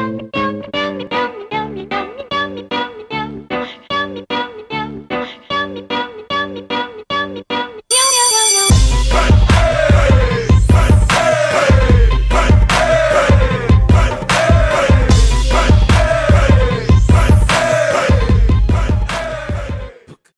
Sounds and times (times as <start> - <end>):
Music: 0.0 - 7.8, 8.7 - 20.2.